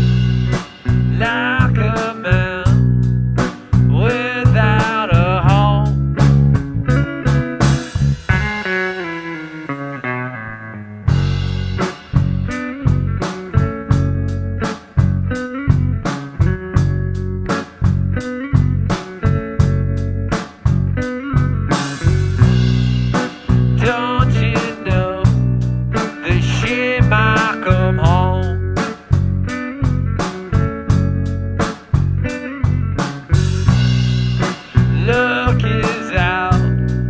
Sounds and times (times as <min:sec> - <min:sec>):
Music: 0:00.0 - 0:37.0.